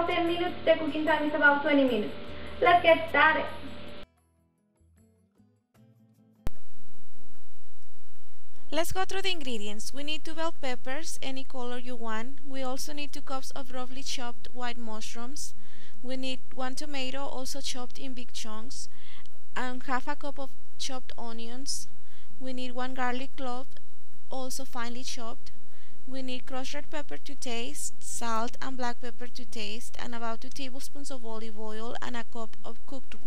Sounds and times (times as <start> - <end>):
Speech: 0.0 - 3.7, 8.7 - 18.9, 19.6 - 25.5, 26.1 - 33.2.